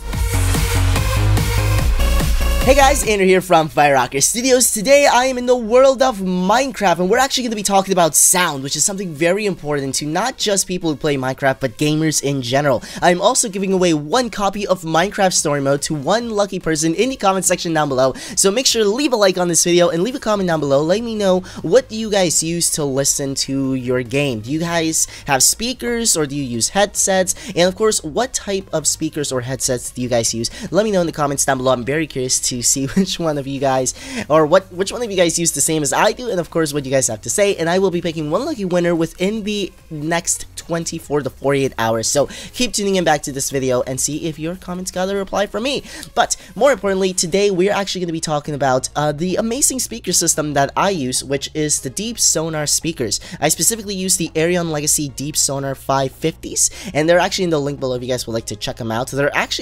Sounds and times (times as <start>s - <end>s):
Speech: 2.6s - 59.6s.